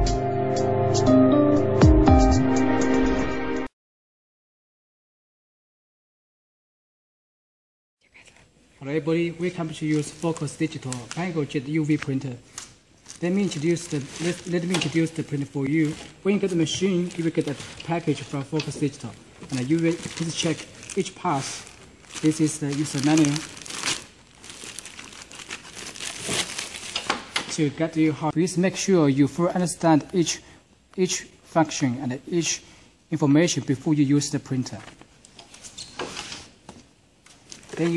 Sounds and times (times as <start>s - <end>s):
Speech: 8.8s - 12.4s, 13.2s - 23.5s, 27.5s - 35.0s, 37.7s - 37.9s.